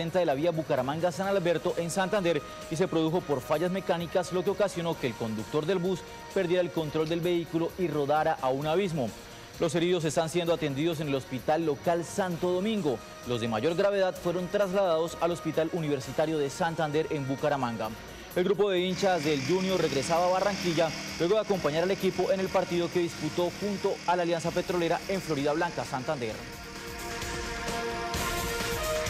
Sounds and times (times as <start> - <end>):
Speech: 0.0 - 26.4
Music: 0.0 - 29.1.